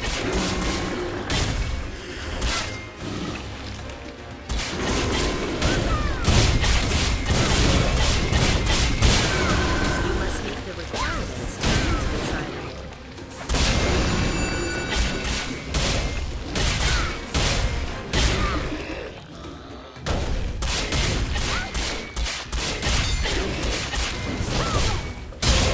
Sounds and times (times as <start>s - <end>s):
Music: 0.0s - 25.7s.